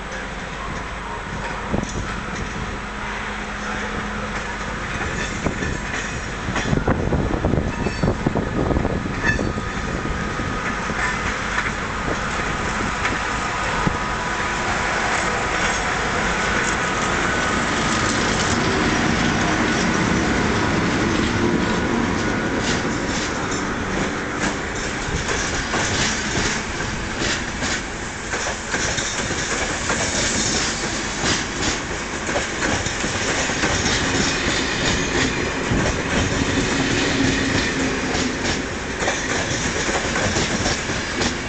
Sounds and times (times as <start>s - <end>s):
Outside, urban or manmade: 0.0s - 41.4s
Railroad car, train wagon: 0.0s - 41.4s
Train: 0.0s - 41.4s.